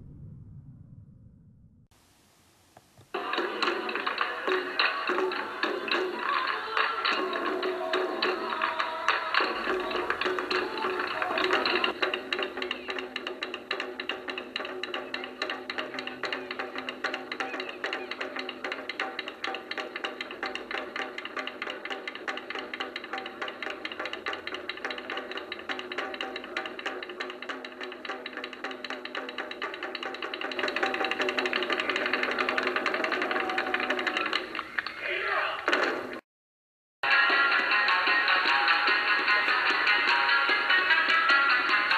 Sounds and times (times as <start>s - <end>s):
Wood block: 3.1s - 35.0s.